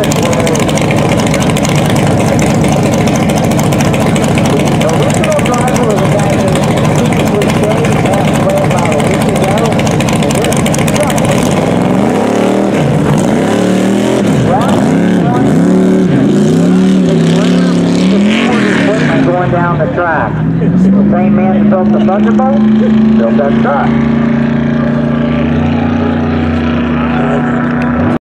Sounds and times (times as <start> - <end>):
Car: 0.0 - 28.2.